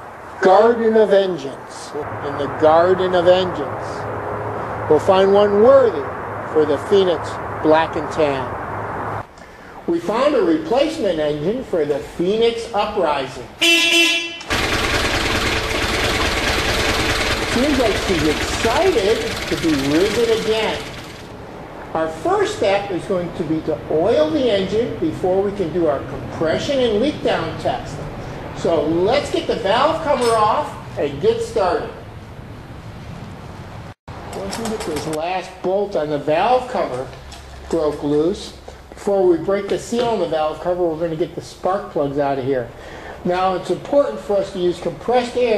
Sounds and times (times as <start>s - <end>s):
Speech: 0.4s - 4.0s, 4.9s - 8.6s, 9.9s - 13.5s, 17.5s - 20.8s, 21.9s - 28.0s, 28.6s - 32.0s, 34.4s - 45.5s
Car: 13.6s - 21.6s
Engine: 13.6s - 23.0s, 33.5s - 35.2s.